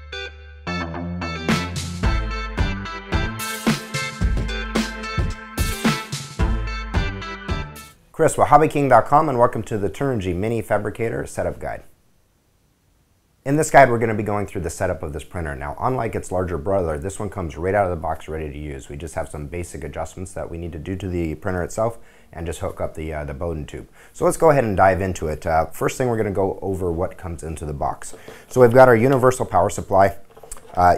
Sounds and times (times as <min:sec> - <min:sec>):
Speech: 0:08.2 - 0:11.9, 0:13.4 - 0:30.9.